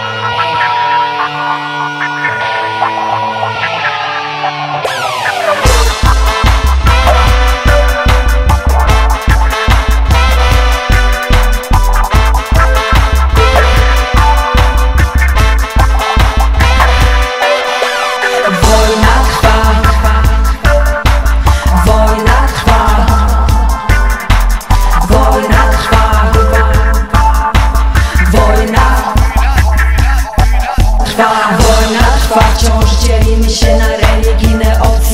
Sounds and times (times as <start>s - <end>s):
Music: 0.0s - 35.1s.